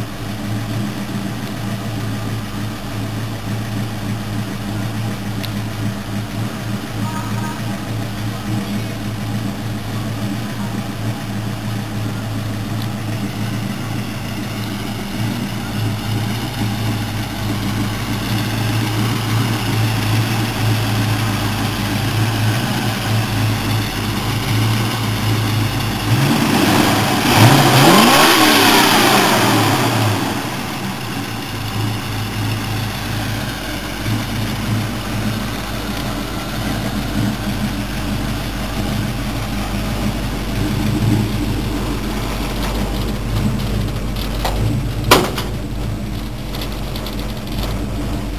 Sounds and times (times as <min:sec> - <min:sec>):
Vehicle: 0:00.0 - 0:48.3.